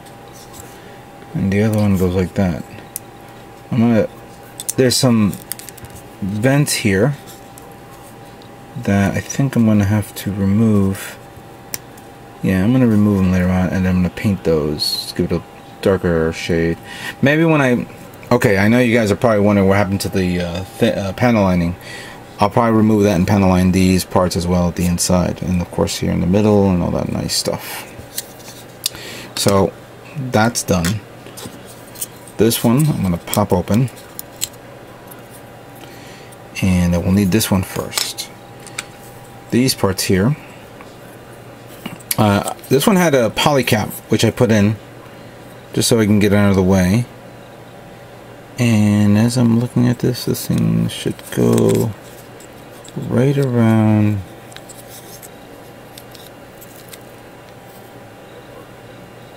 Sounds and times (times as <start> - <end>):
Inside, small room: 0.0 - 59.3
Speech: 1.4 - 2.8, 3.7 - 4.1, 4.7 - 5.4, 6.2 - 7.2, 8.8 - 11.2, 12.4 - 21.8, 22.4 - 27.9, 29.4 - 31.0, 32.4 - 34.0, 36.6 - 38.4, 39.5 - 40.4, 42.1 - 44.8, 45.7 - 47.1, 48.6 - 52.0, 53.0 - 54.3.